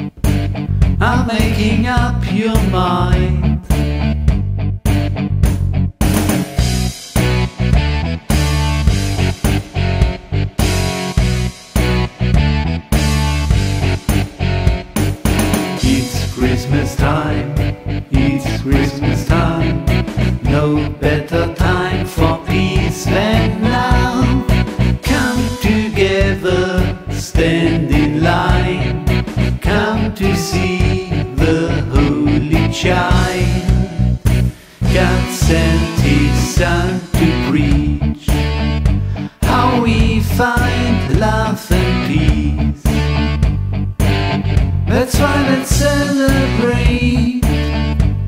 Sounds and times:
Happy music: 0.0s - 48.2s.

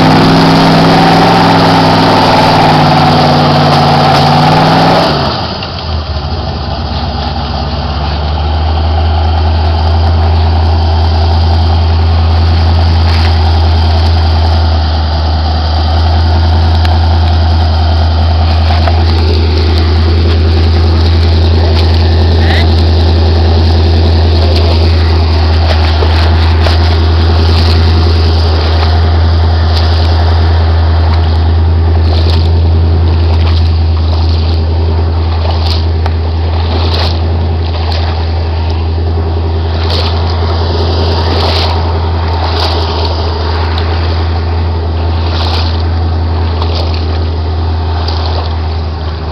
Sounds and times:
Car: 0.0s - 49.3s
Outside, rural or natural: 0.0s - 49.3s
Idling: 5.3s - 49.3s.

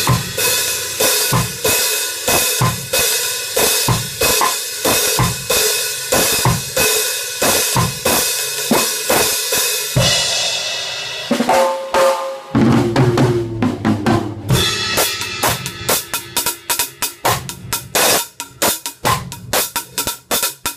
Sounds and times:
Snare drum: 0.0s - 0.4s, 1.0s - 10.1s, 11.3s - 20.7s
Bass drum: 0.0s - 0.5s, 1.3s - 3.1s, 3.8s - 5.6s, 6.2s - 9.3s, 12.6s - 16.5s, 17.2s - 20.3s
Drum kit: 0.0s - 20.7s.

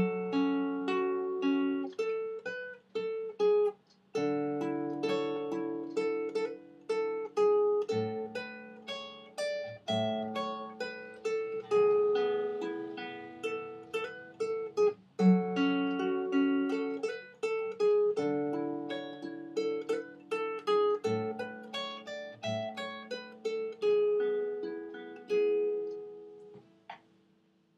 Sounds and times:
Acoustic guitar: 0.0s - 27.2s.

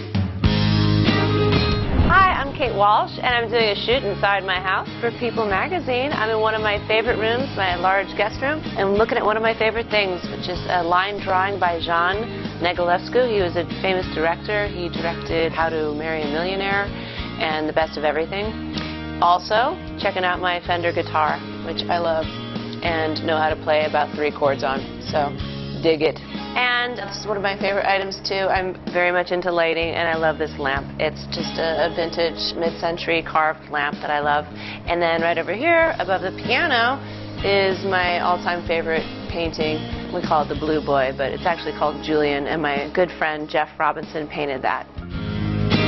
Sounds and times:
Music: 0.0s - 45.8s
Speech: 2.1s - 18.5s, 22.8s - 44.8s.

